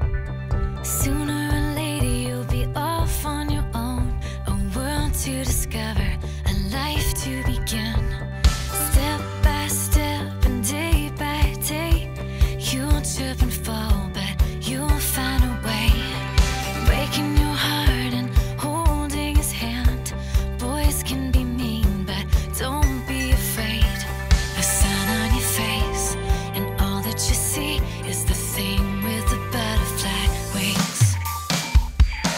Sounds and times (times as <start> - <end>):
Music: 0.0 - 32.3.